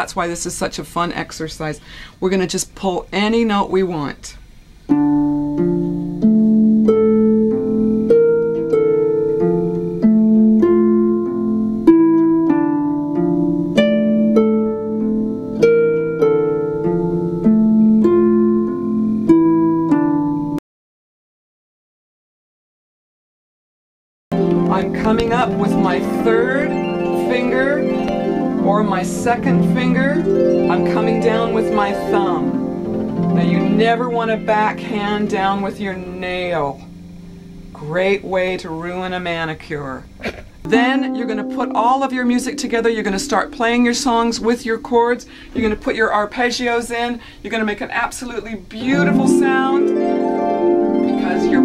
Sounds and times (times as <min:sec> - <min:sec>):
Speech: 0:00.0 - 0:04.4, 0:24.7 - 0:27.8, 0:28.7 - 0:32.6, 0:33.4 - 0:36.9, 0:37.8 - 0:40.1, 0:40.7 - 0:49.9, 0:51.2 - 0:51.6
Harp: 0:04.9 - 0:20.6, 0:24.4 - 0:37.8, 0:40.7 - 0:45.8, 0:48.8 - 0:51.6.